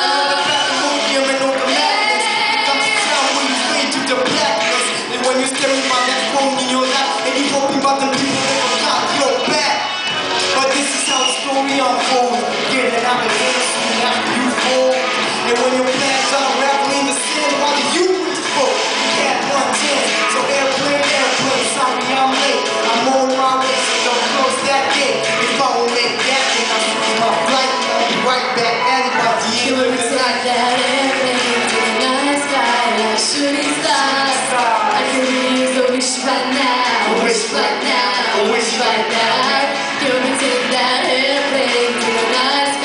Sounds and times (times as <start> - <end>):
Female singing: 0.0 - 4.7, 28.9 - 42.8
Male singing: 0.0 - 9.8, 10.6 - 42.8
Music: 0.0 - 42.8.